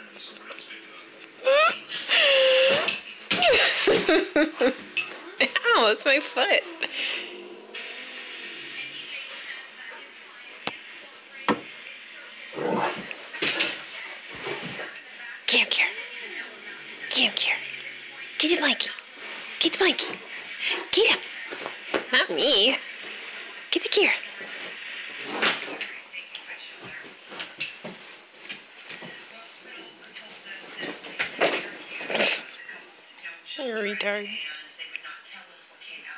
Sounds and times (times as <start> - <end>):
Speech: 5.4 - 7.2, 8.6 - 24.7, 25.7 - 27.8, 28.9 - 36.1.